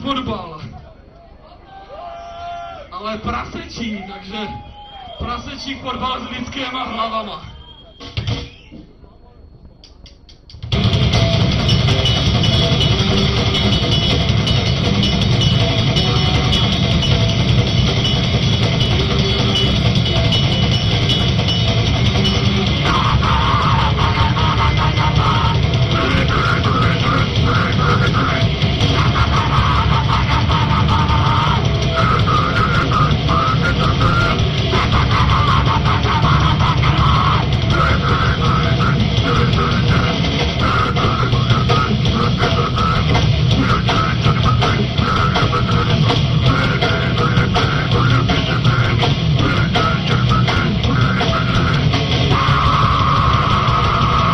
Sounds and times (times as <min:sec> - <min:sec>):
Music: 0:07.9 - 0:08.9, 0:09.8 - 0:54.3.